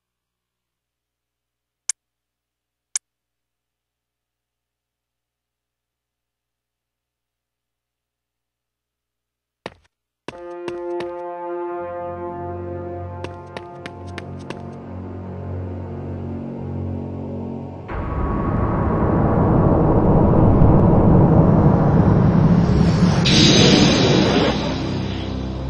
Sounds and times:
Scary music: 10.3s - 25.6s.

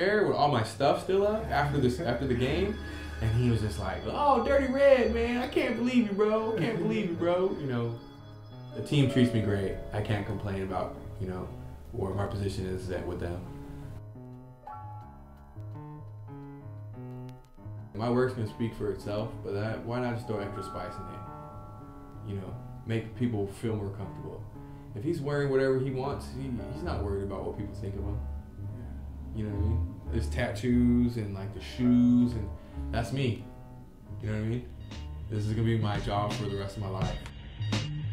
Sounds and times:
Speech: 0.0s - 8.0s, 8.8s - 13.5s, 18.0s - 21.2s, 22.2s - 24.4s, 25.0s - 28.2s, 29.3s - 33.5s, 34.2s - 34.7s, 35.3s - 37.2s
Music: 0.0s - 38.1s.

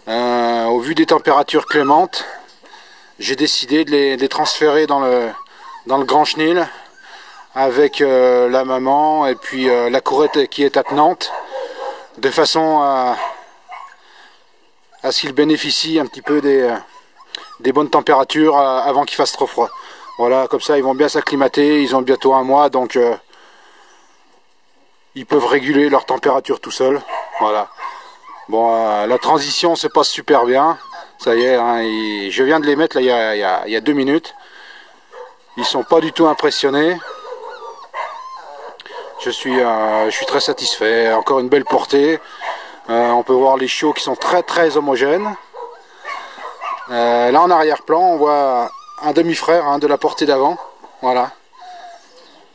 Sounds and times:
Speech: 0.1s - 2.4s, 3.2s - 6.8s, 7.6s - 11.4s, 12.2s - 13.3s, 15.0s - 16.9s, 17.6s - 23.2s, 25.2s - 27.7s, 28.5s - 34.4s, 35.6s - 37.1s, 39.2s - 42.2s, 42.9s - 45.4s, 46.8s - 51.4s.

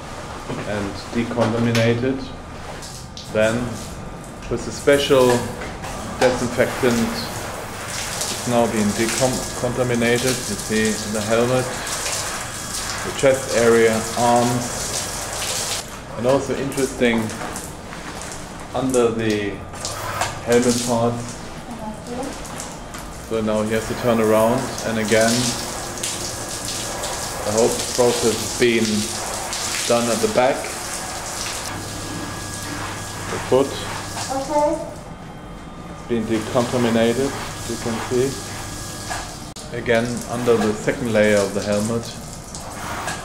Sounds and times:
Speech: 0.5s - 2.4s, 3.3s - 3.8s, 4.4s - 5.6s, 6.2s - 7.4s, 8.4s - 11.8s, 13.0s - 14.8s, 16.1s - 17.4s, 18.8s - 19.6s, 20.4s - 22.4s, 23.3s - 25.6s, 27.4s - 29.2s, 29.9s - 30.7s, 33.3s - 34.9s, 36.1s - 38.4s, 39.7s - 42.2s.

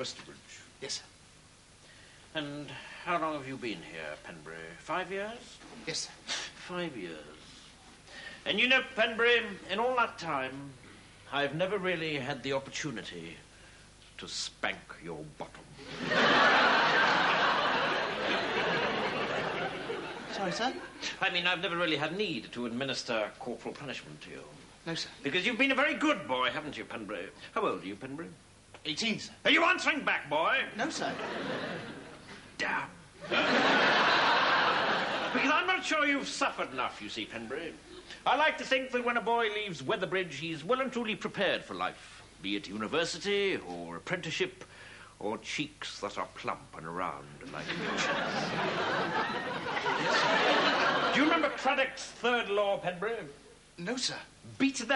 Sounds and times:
Speech: 0.0s - 1.1s, 2.3s - 7.5s, 8.4s - 13.5s, 14.2s - 15.8s, 20.3s - 31.3s, 32.6s - 33.1s, 35.3s - 48.6s, 51.1s - 54.9s.

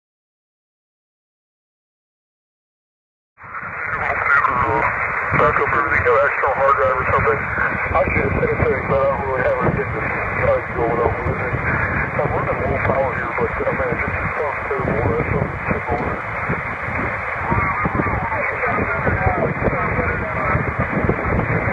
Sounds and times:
Radio: 3.5s - 21.7s
Speech: 3.8s - 16.2s, 17.5s - 20.7s.

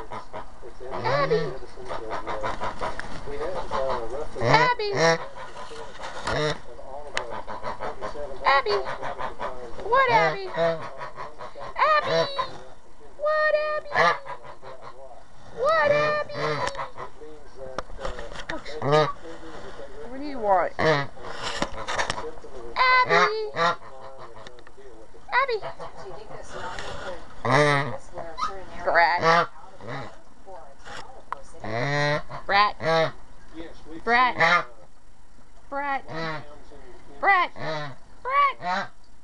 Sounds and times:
Honk: 0.0s - 17.3s, 18.0s - 19.6s, 20.5s - 24.6s, 25.3s - 30.2s, 31.6s - 33.2s, 34.1s - 34.8s, 36.1s - 36.6s, 37.2s - 39.0s.

